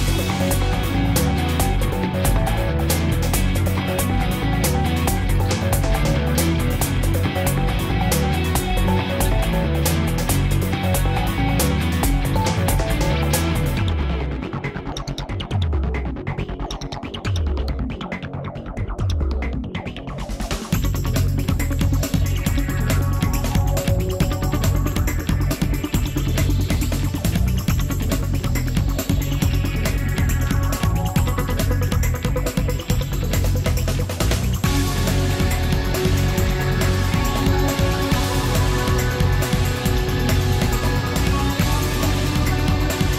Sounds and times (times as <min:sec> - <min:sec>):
Music: 0:00.0 - 0:43.1.